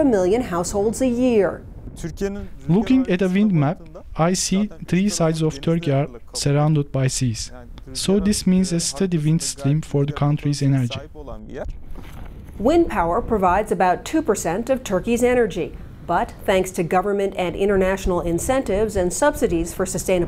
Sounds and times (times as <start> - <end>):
Speech: 0.0 - 11.7, 12.6 - 20.2.